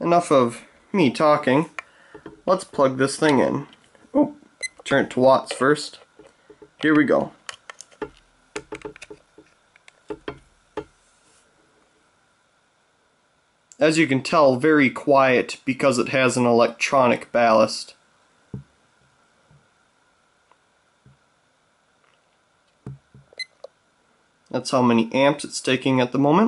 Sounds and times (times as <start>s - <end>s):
Speech: 0.0s - 1.7s, 2.5s - 6.0s, 6.8s - 7.4s, 13.7s - 18.0s, 24.5s - 26.4s.